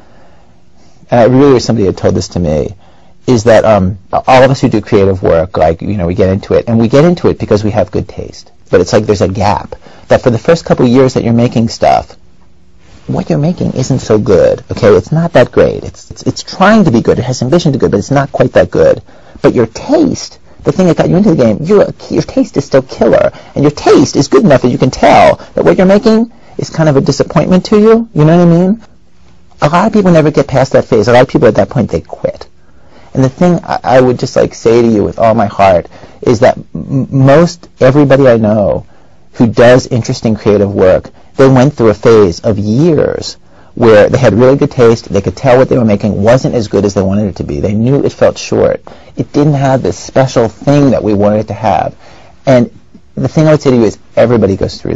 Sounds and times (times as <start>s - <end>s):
Speech: 1.1s - 12.2s, 13.0s - 28.9s, 29.6s - 54.9s.